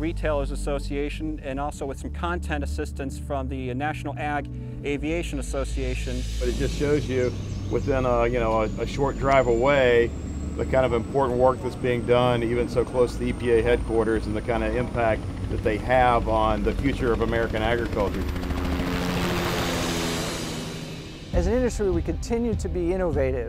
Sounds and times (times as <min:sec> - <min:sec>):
Speech: 0:00.0 - 0:18.3, 0:21.4 - 0:23.4.